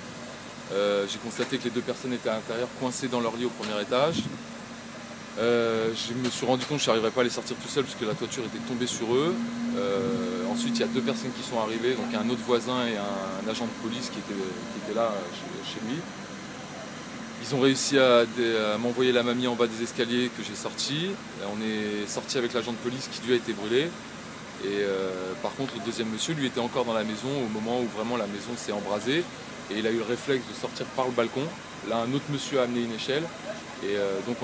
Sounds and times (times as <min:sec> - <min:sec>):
Speech: 0:00.7 - 0:04.4, 0:05.4 - 0:16.2, 0:17.4 - 0:24.0, 0:24.6 - 0:34.4.